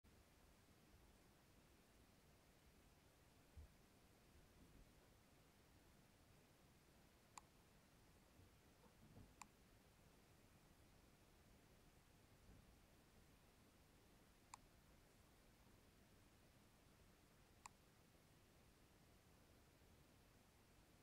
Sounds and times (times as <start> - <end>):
Silence: 0.0 - 21.0.